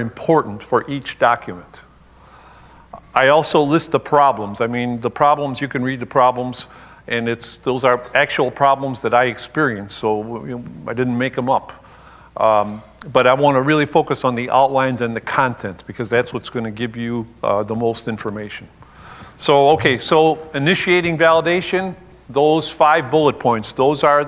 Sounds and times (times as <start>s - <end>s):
Speech: 0.0s - 1.9s, 3.0s - 11.8s, 12.4s - 18.7s, 19.4s - 24.2s.